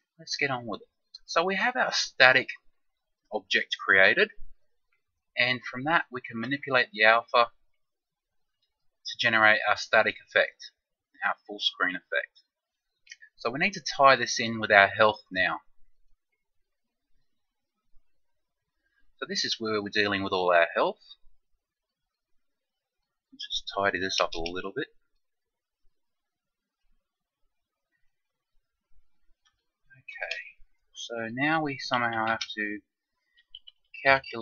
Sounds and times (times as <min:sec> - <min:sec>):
Speech: 0:00.2 - 0:02.7, 0:03.3 - 0:04.4, 0:05.4 - 0:07.6, 0:09.1 - 0:12.4, 0:13.2 - 0:15.7, 0:19.2 - 0:21.2, 0:23.4 - 0:25.0, 0:30.0 - 0:32.9, 0:34.0 - 0:34.4.